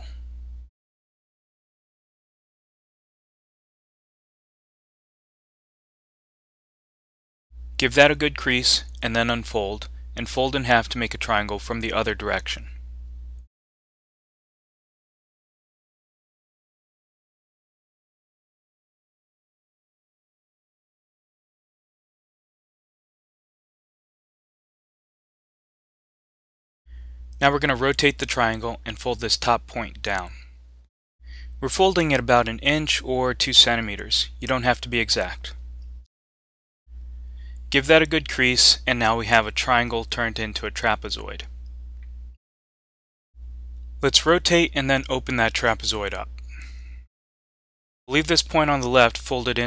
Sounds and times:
Speech: 7.8 - 12.7, 27.4 - 30.4, 31.6 - 35.6, 37.7 - 41.5, 44.0 - 46.3, 48.1 - 49.6.

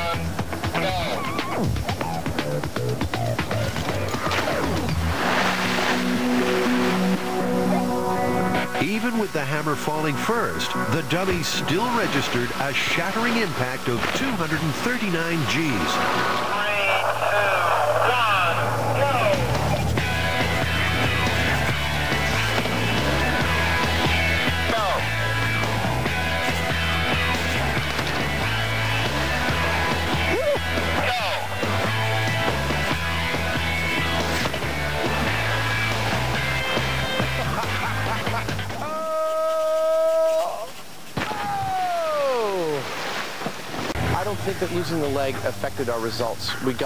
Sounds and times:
Music: 0.0 - 17.2, 18.0 - 38.8
Speech: 8.8 - 19.5, 44.1 - 46.8
Radio: 10.9 - 19.8.

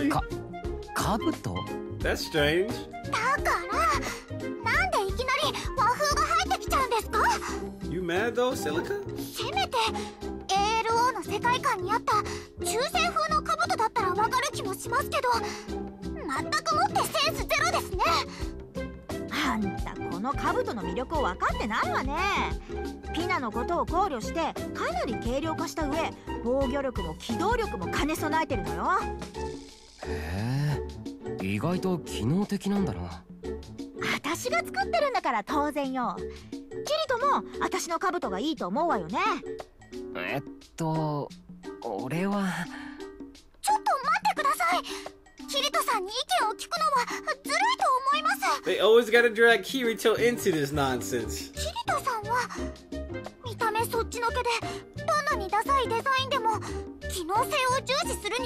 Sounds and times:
Music: 0.0 - 58.4.

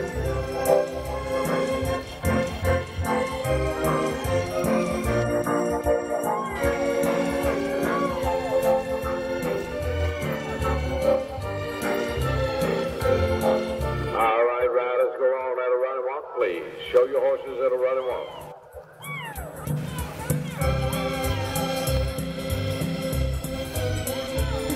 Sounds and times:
Music: 0.0 - 24.7
Speech: 14.2 - 18.5.

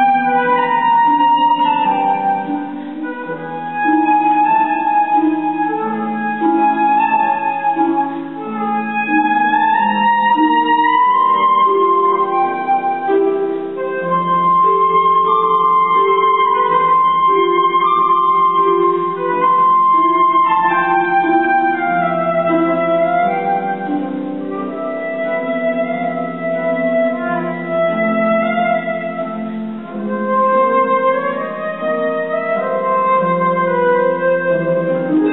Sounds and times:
Flute: 0.0 - 35.3.

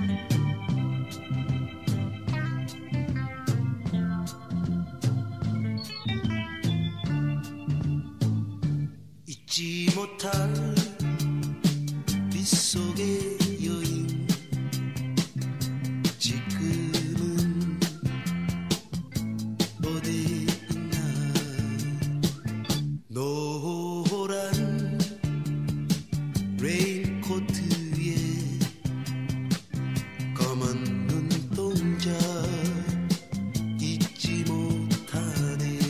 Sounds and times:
Music: 0.0 - 35.8.

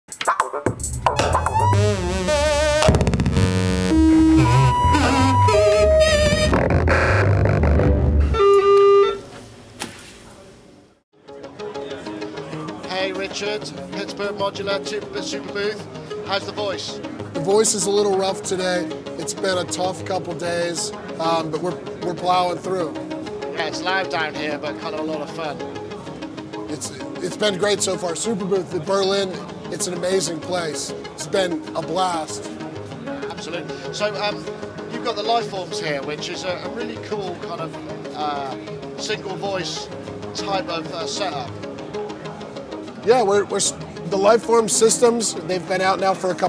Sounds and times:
Synthesizer: 0.1 - 9.2, 11.2 - 46.4.

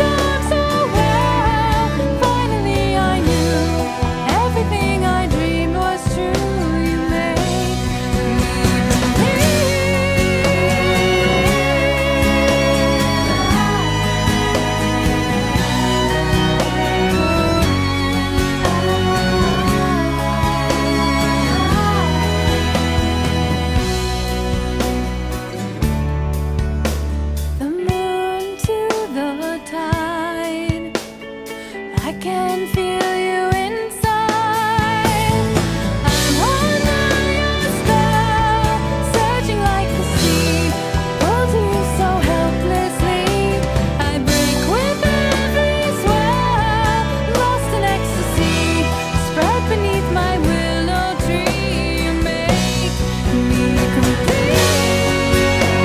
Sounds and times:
Music: 0.0 - 55.8.

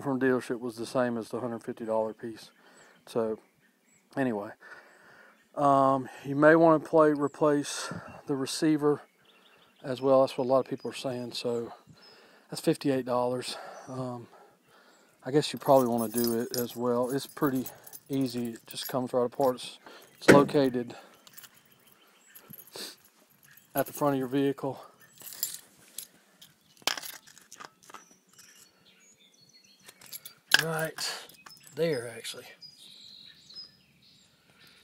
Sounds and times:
Speech: 0.0 - 2.5, 3.1 - 3.4, 4.2 - 4.6, 5.6 - 9.0, 9.8 - 11.8, 12.5 - 14.4, 15.2 - 21.0, 23.8 - 24.9, 30.6 - 32.6.

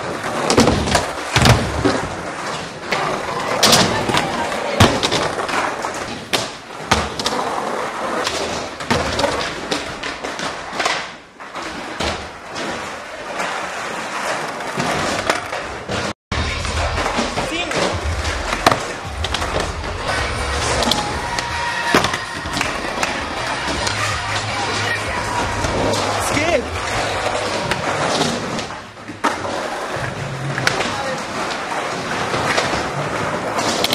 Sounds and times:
Skateboard: 0.0 - 33.9
Speech: 24.2 - 26.7, 30.7 - 31.4.

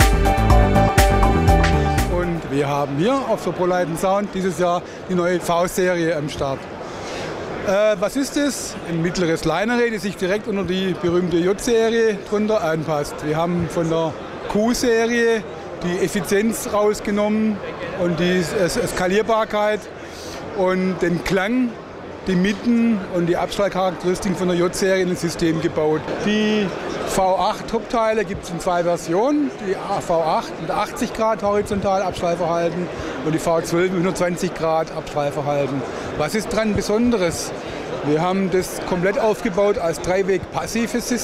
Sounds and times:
Speech: 2.1 - 6.6, 7.6 - 19.9, 20.6 - 41.2.

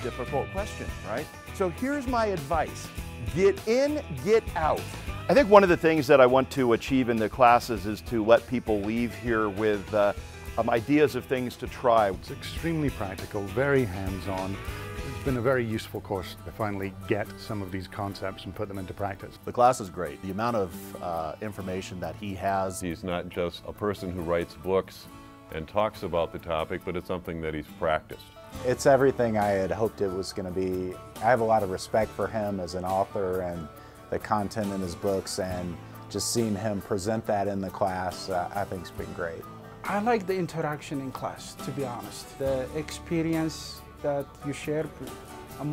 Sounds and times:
Speech: 0.0 - 14.6, 15.2 - 45.7
Music: 0.0 - 45.7.

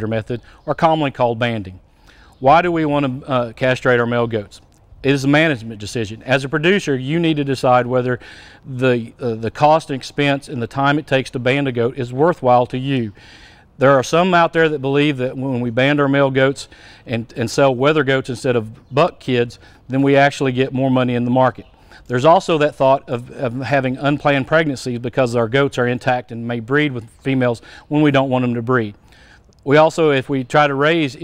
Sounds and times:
Speech: 0.0 - 1.8, 2.4 - 13.2, 13.8 - 29.0, 29.6 - 31.2.

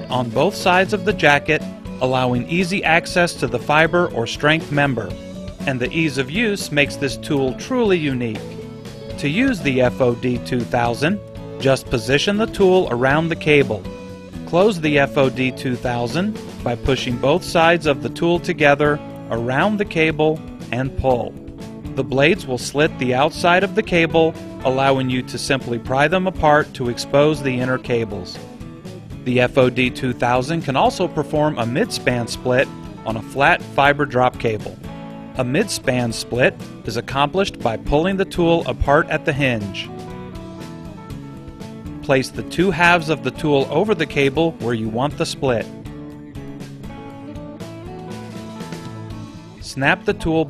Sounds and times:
Speech: 0.0 - 5.1, 5.7 - 8.6, 9.2 - 13.8, 14.5 - 21.3, 22.0 - 28.4, 29.3 - 34.8, 35.4 - 39.9, 42.1 - 45.7, 49.6 - 50.5
Music: 0.0 - 50.5.

